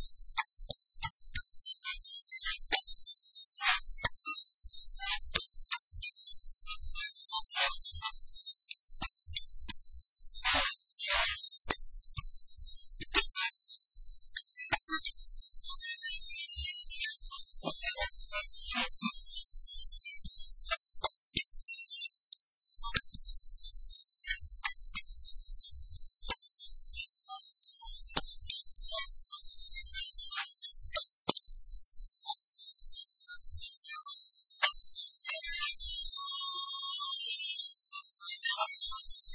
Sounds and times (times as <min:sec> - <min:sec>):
Music: 0:00.0 - 0:39.3.